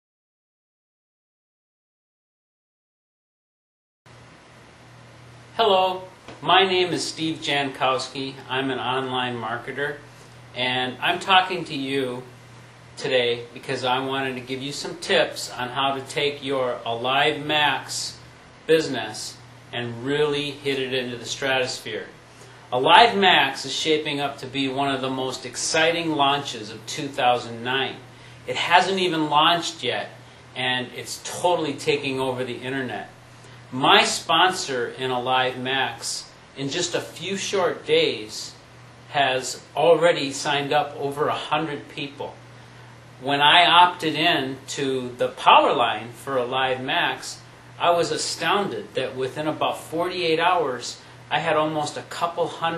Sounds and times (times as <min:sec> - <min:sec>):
Speech: 0:05.6 - 0:10.0, 0:10.6 - 0:12.3, 0:13.0 - 0:42.4, 0:43.2 - 0:52.7.